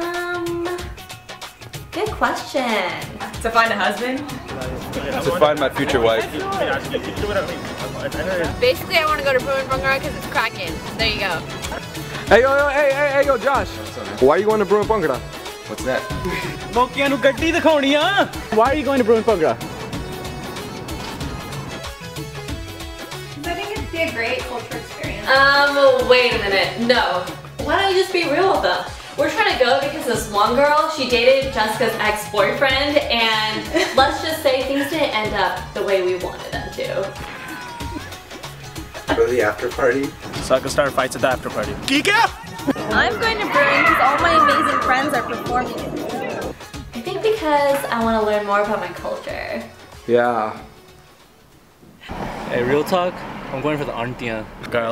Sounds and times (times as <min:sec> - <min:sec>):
Music: 0:00.0 - 0:52.6.